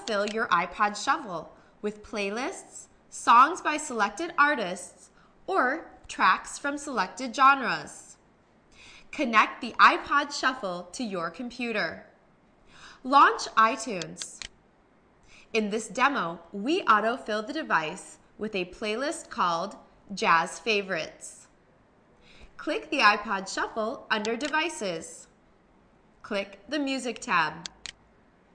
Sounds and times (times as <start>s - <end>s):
Speech: 0.0s - 8.2s, 9.2s - 12.1s, 13.1s - 14.5s, 15.6s - 21.5s, 22.6s - 25.3s, 26.3s - 27.8s.